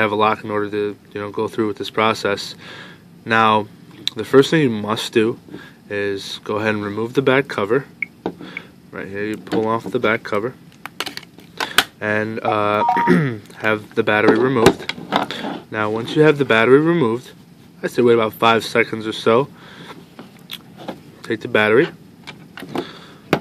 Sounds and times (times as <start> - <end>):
Speech: 0.0 - 2.6, 3.2 - 7.9, 8.9 - 10.6, 12.0 - 14.9, 15.7 - 19.5, 21.2 - 22.0
Telephone dialing, DTMF: 12.8 - 13.1.